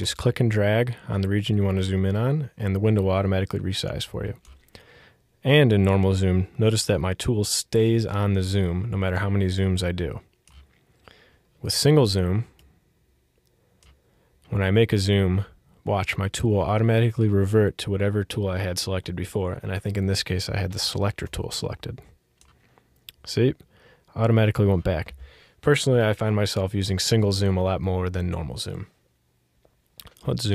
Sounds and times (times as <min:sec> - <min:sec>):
Speech: 0:00.0 - 0:04.4, 0:05.4 - 0:10.3, 0:11.6 - 0:12.6, 0:14.5 - 0:22.2, 0:23.1 - 0:29.0, 0:30.0 - 0:30.5.